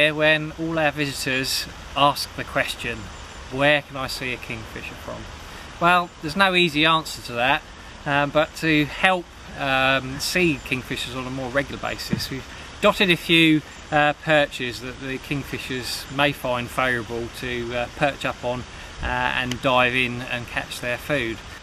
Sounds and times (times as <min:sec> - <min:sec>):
Speech: 0:00.0 - 0:21.5.